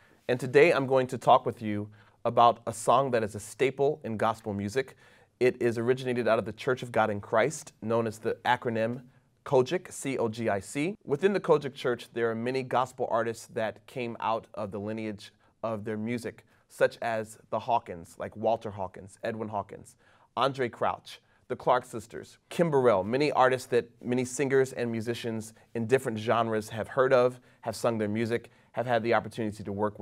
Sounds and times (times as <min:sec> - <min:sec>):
Speech: 0:00.3 - 0:30.0.